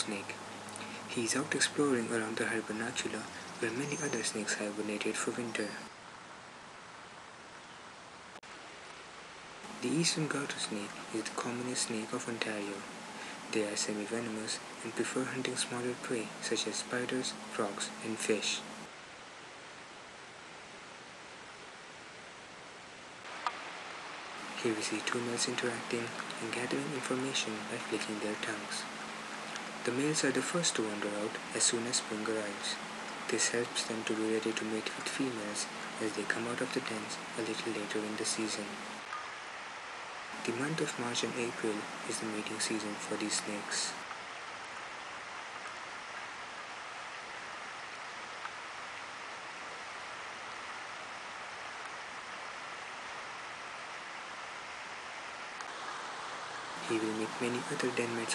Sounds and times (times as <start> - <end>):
Speech: 0.0 - 0.4, 1.1 - 5.9, 9.8 - 12.9, 13.5 - 18.8, 24.5 - 28.9, 29.8 - 38.9, 40.4 - 44.0, 56.8 - 58.3
Outside, rural or natural: 0.0 - 58.3.